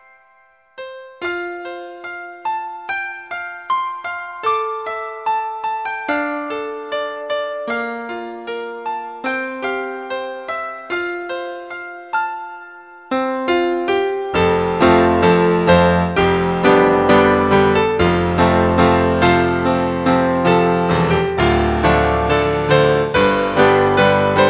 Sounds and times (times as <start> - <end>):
Music: 0.0 - 24.5.